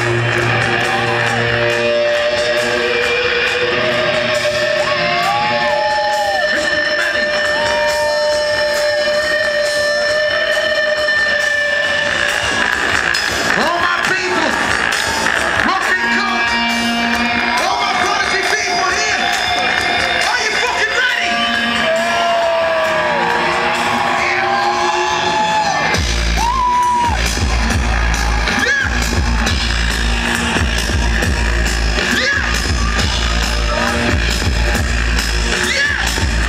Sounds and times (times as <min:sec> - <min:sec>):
Music: 0:00.0 - 0:36.4.